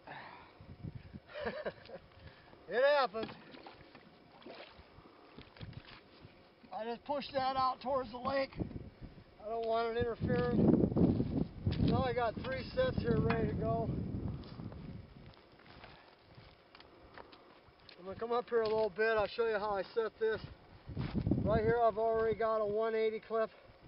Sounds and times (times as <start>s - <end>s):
Outside, rural or natural: 0.0s - 23.8s
Speech: 2.7s - 3.3s, 6.7s - 8.6s, 9.4s - 10.6s, 11.9s - 13.9s, 18.0s - 20.5s, 21.5s - 23.6s.